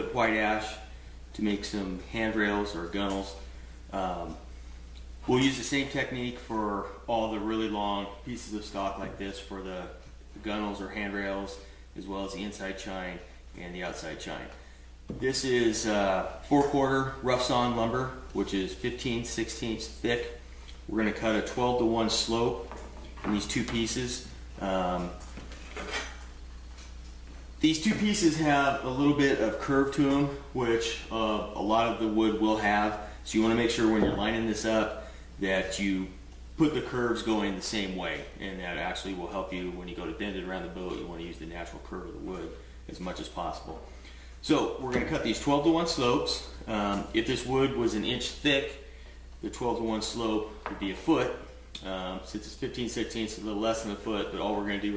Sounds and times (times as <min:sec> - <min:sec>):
Speech: 0:00.0 - 0:04.5, 0:05.2 - 0:25.3, 0:27.6 - 0:54.9.